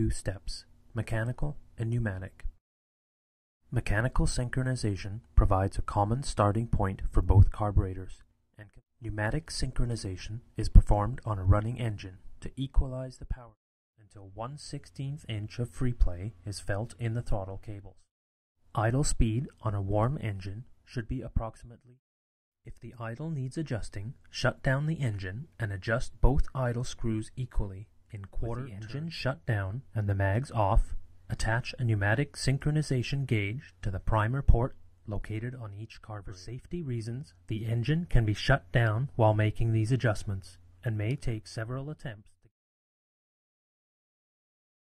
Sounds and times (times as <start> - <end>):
Speech: 0.0 - 2.6, 3.7 - 18.1, 18.7 - 22.0, 22.7 - 42.5.